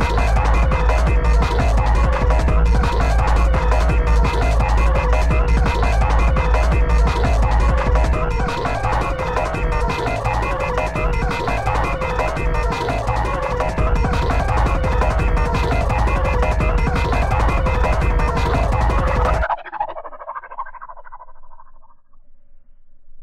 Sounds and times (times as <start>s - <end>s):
Techno: 0.0s - 21.0s.